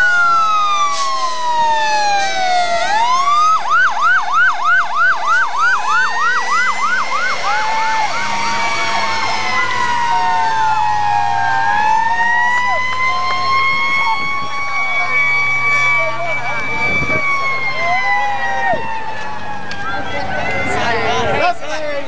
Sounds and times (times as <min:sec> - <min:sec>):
Fire engine, fire truck (siren): 0:00.0 - 0:22.0
Speech: 0:19.8 - 0:22.0.